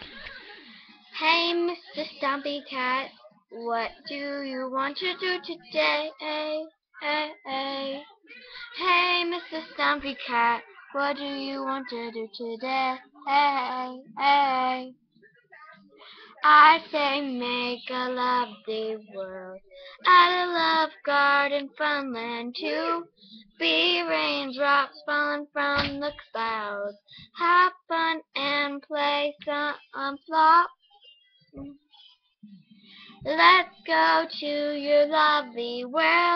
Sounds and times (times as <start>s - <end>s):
Speech: 0.0s - 36.3s.